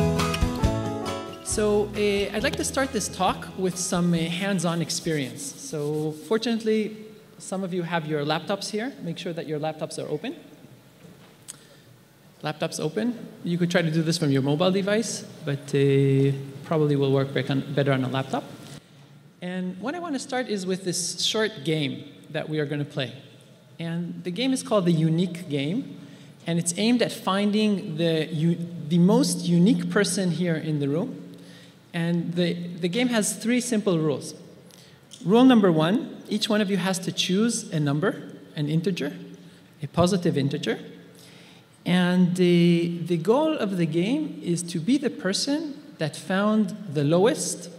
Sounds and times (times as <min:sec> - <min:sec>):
Speech: 0:01.5 - 0:10.5, 0:12.4 - 0:18.5, 0:19.4 - 0:31.2, 0:31.9 - 0:34.4, 0:35.2 - 0:40.9, 0:41.8 - 0:47.7.